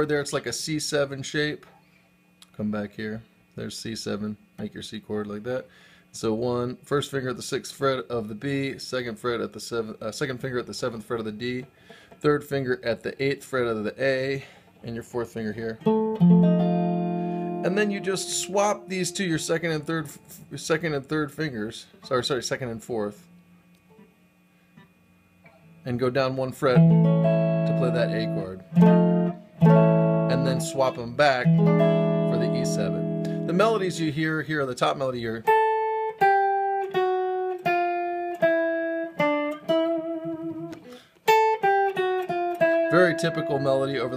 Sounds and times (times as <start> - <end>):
Inside, small room: 0.0 - 44.1
Guitar: 6.1 - 44.1.